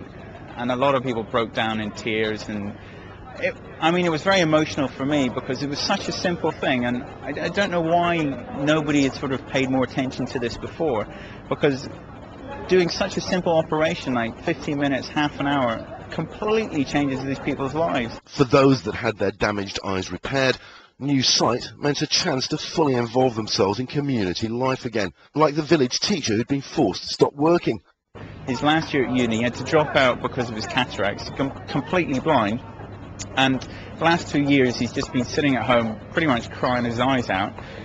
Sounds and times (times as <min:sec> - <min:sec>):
Speech: 0:00.6 - 0:27.8, 0:28.5 - 0:37.7.